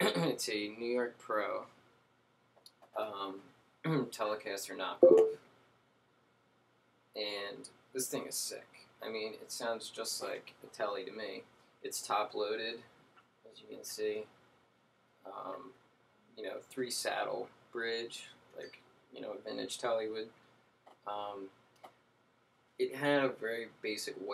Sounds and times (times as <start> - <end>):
Speech: 0.0 - 1.7, 3.0 - 5.4, 7.2 - 12.9, 13.5 - 14.3, 15.3 - 15.8, 16.4 - 20.4, 21.1 - 21.5, 22.8 - 24.3.